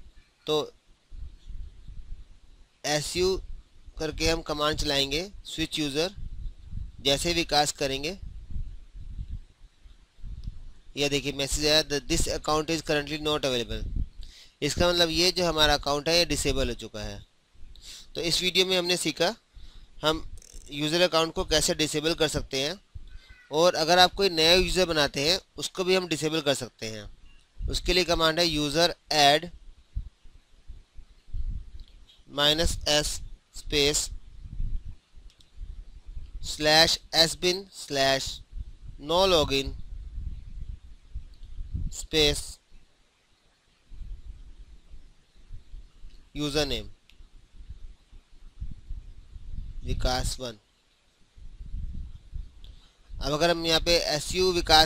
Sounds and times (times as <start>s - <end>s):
Speech: 0.5s - 0.7s, 2.9s - 3.4s, 4.0s - 6.2s, 7.0s - 8.2s, 11.0s - 13.8s, 14.6s - 17.2s, 18.2s - 19.4s, 20.0s - 22.8s, 23.5s - 27.1s, 27.7s - 29.5s, 32.3s - 34.1s, 36.4s - 38.4s, 39.0s - 39.8s, 41.9s - 42.6s, 46.4s - 47.0s, 49.9s - 50.6s, 53.2s - 54.8s.